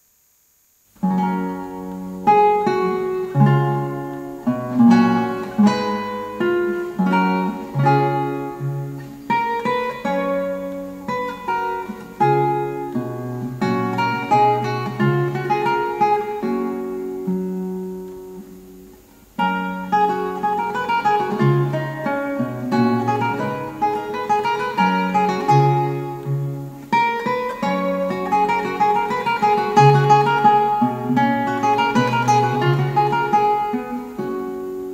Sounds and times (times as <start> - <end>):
Acoustic guitar: 0.7 - 34.9.